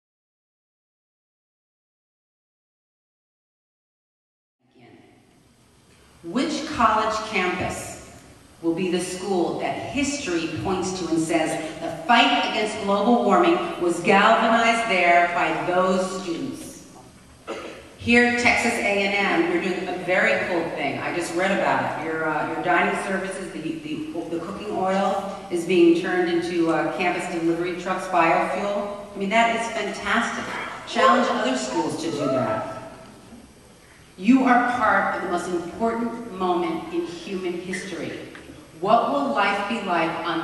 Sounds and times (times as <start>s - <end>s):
Speech: 4.6s - 5.1s, 6.3s - 8.0s, 8.6s - 16.8s, 17.5s - 32.8s, 34.2s - 40.4s.